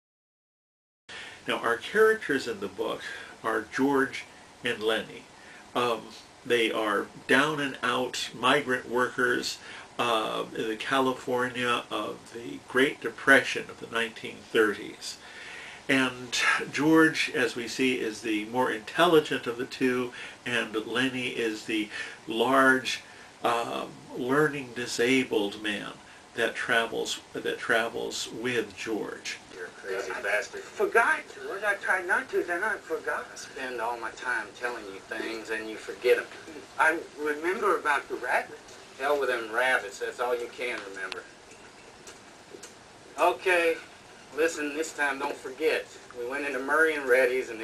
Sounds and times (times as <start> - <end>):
Speech: 1.4 - 15.2, 15.9 - 41.3, 43.2 - 47.6.